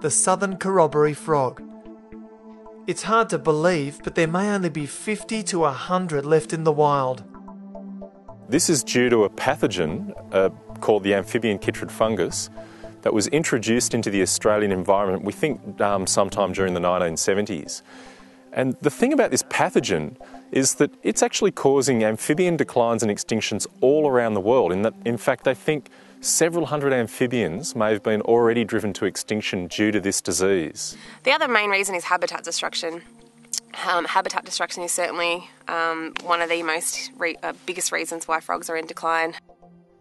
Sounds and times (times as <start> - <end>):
Speech: 0.0 - 1.6, 2.9 - 7.2, 8.5 - 12.5, 13.1 - 17.8, 18.6 - 33.0, 33.6 - 39.4
Music: 0.0 - 40.0.